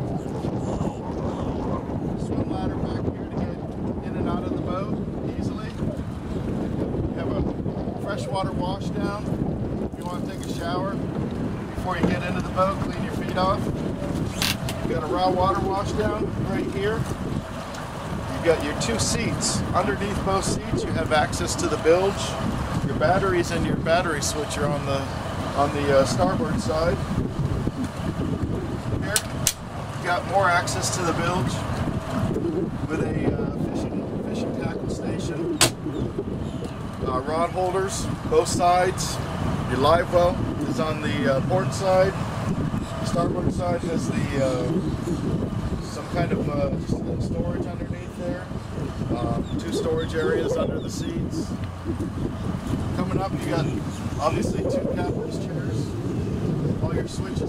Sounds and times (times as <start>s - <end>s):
Speech: 2.2s - 5.8s, 7.2s - 9.2s, 10.0s - 11.0s, 11.8s - 13.7s, 14.9s - 17.0s, 18.3s - 27.0s, 30.0s - 31.6s, 32.8s - 35.5s, 37.0s - 42.2s, 43.1s - 44.8s, 45.8s - 48.5s, 49.1s - 51.6s, 53.0s - 55.9s, 56.8s - 57.4s.